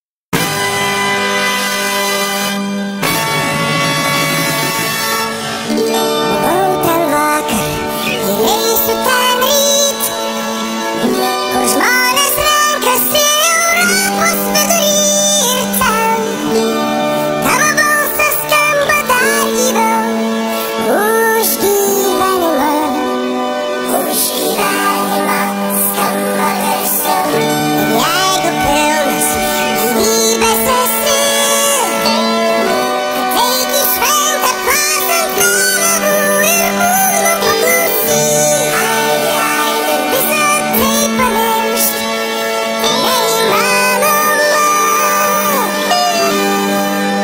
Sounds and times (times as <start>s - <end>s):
Music: 0.3s - 47.2s.